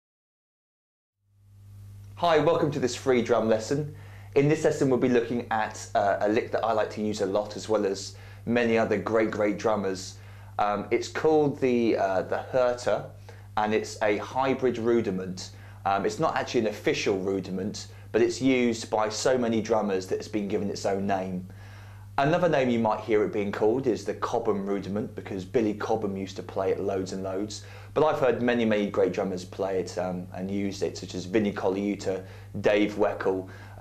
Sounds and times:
Speech: 0:02.2 - 0:21.5, 0:22.2 - 0:33.8.

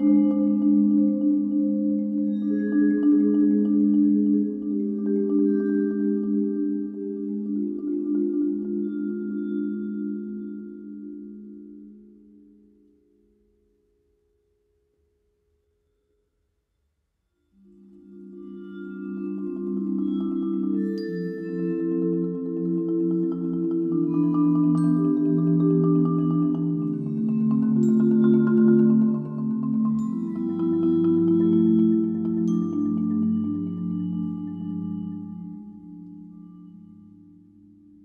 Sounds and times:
Music: 0:00.0 - 0:38.0.

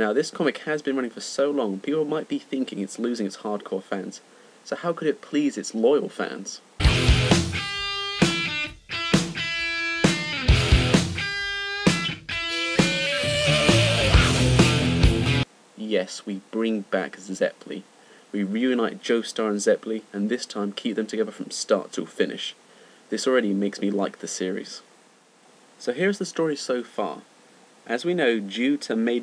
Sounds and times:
Speech: 0:00.0 - 0:06.6, 0:15.8 - 0:24.9, 0:25.8 - 0:27.3, 0:27.9 - 0:29.2
Music: 0:06.8 - 0:15.5.

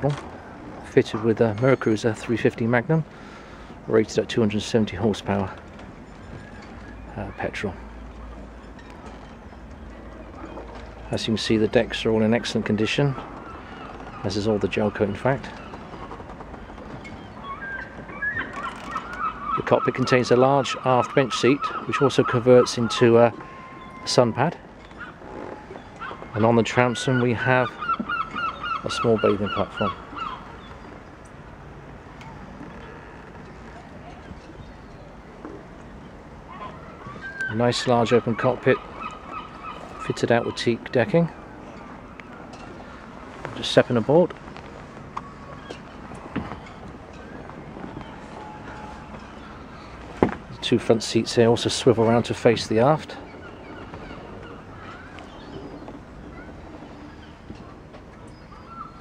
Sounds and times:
Speech: 0:00.0 - 0:00.2, 0:00.8 - 0:03.1, 0:03.9 - 0:05.6, 0:07.1 - 0:07.8, 0:11.1 - 0:13.2, 0:14.2 - 0:15.6, 0:19.6 - 0:23.4, 0:24.1 - 0:24.6, 0:26.4 - 0:27.8, 0:28.8 - 0:30.0, 0:37.4 - 0:38.8, 0:40.0 - 0:41.4, 0:43.6 - 0:44.3, 0:50.5 - 0:53.2.

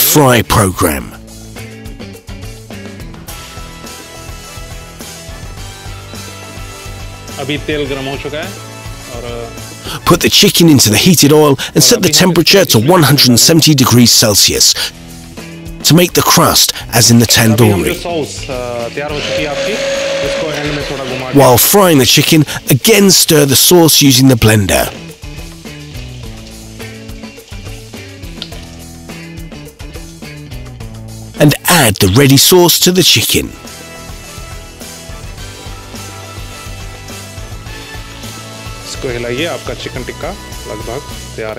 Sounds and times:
Speech: 0:00.0 - 0:01.2, 0:07.4 - 0:14.9, 0:15.8 - 0:25.0, 0:31.4 - 0:33.6, 0:38.9 - 0:41.5
Music: 0:00.0 - 0:41.5.

